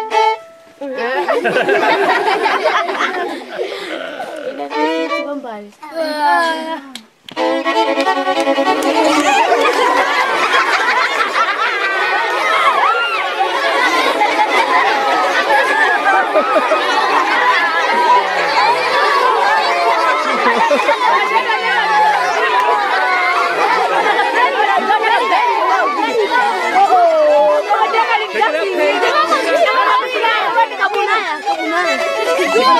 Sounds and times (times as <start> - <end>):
Violin, fiddle: 0.0 - 5.8, 7.3 - 32.8
Speech: 3.9 - 7.1, 12.2 - 32.8.